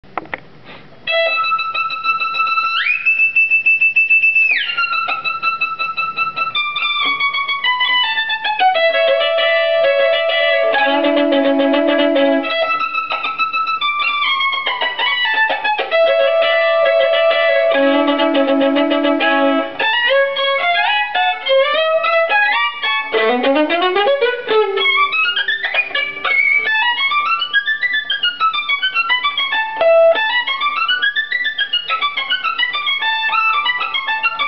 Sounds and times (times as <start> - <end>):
Inside, small room: 0.0 - 34.4
Violin, fiddle: 1.1 - 34.4.